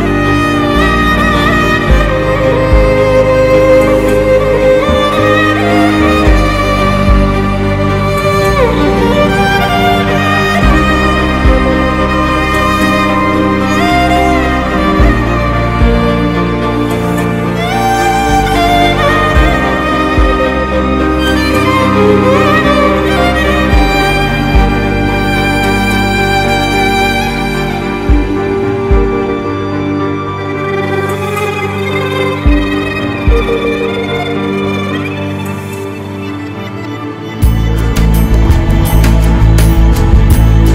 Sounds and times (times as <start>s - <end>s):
Background music: 0.0s - 40.7s.